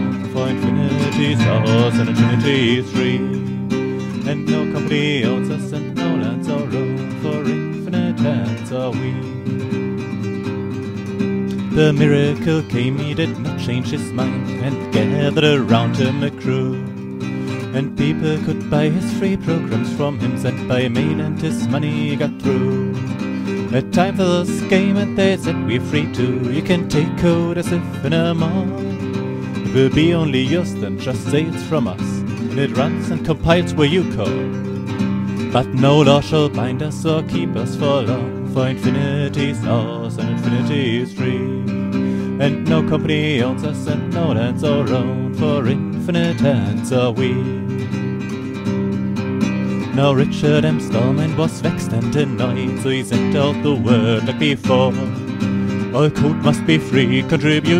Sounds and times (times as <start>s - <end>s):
Acoustic guitar: 0.0s - 57.8s.